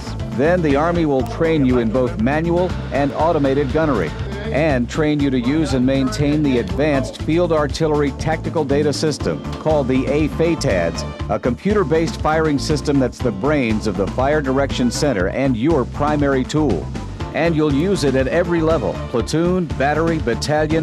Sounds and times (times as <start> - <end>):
Music: 0.0 - 20.8
Speech: 0.0 - 20.8.